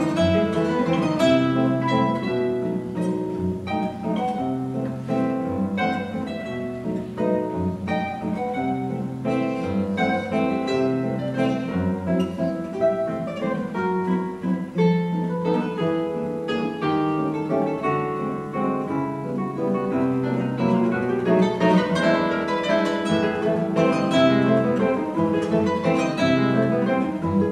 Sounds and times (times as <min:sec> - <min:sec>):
Acoustic guitar: 0:00.0 - 0:27.5.